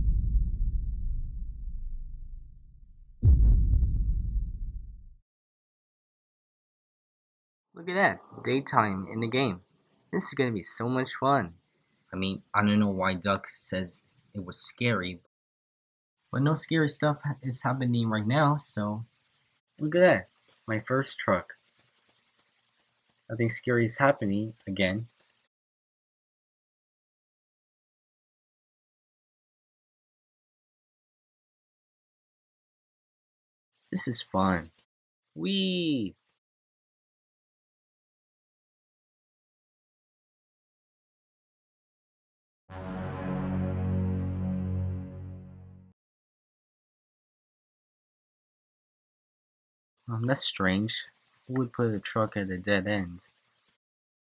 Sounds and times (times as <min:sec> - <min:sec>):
Speech: 0:07.8 - 0:09.6, 0:10.2 - 0:11.6, 0:12.2 - 0:15.3, 0:16.4 - 0:19.1, 0:19.8 - 0:21.6, 0:23.3 - 0:25.1, 0:34.0 - 0:34.7, 0:35.4 - 0:36.2, 0:50.1 - 0:53.2.